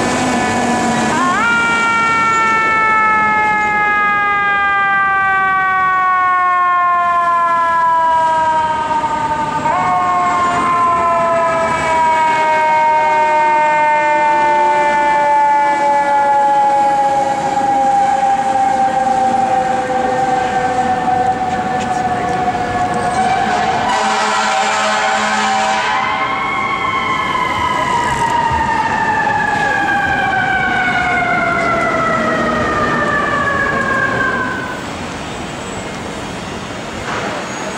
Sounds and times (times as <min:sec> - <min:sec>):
Fire engine, fire truck (siren): 0:00.0 - 0:37.7.